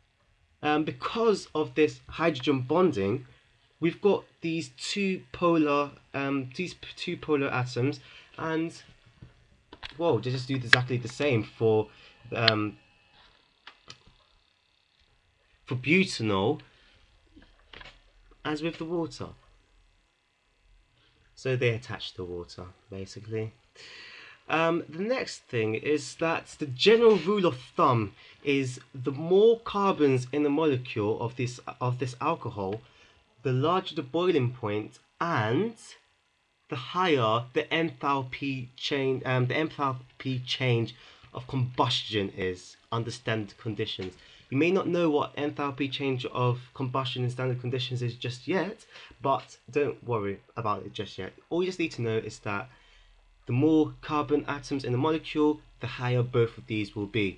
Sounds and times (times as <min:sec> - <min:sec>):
Speech: 0:00.6 - 0:08.9, 0:09.9 - 0:12.8, 0:15.7 - 0:16.7, 0:18.4 - 0:19.4, 0:21.4 - 0:23.6, 0:24.4 - 0:36.0, 0:36.7 - 0:52.7, 0:53.5 - 0:57.3.